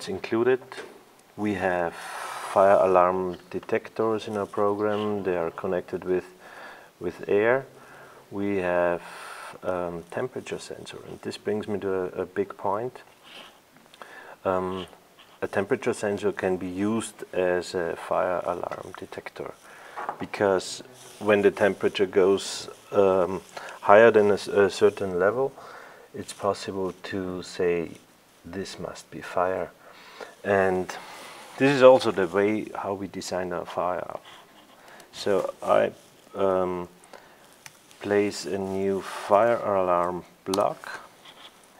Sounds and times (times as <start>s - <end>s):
Speech: 0.0s - 6.4s, 7.0s - 13.1s, 14.4s - 19.6s, 20.2s - 25.6s, 26.2s - 29.8s, 30.4s - 31.0s, 31.6s - 34.3s, 35.1s - 37.0s, 38.0s - 41.1s.